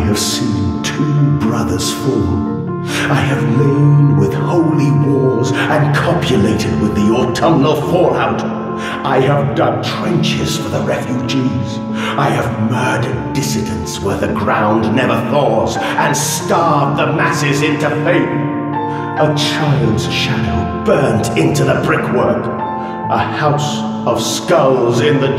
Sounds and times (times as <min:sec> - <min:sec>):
Music: 0:00.0 - 0:25.3
Speech: 0:00.0 - 0:25.3.